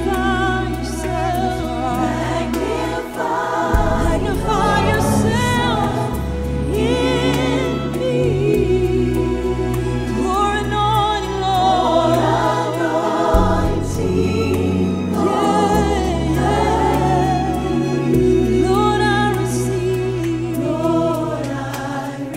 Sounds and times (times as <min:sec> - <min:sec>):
Gospel music: 0:00.0 - 0:22.3.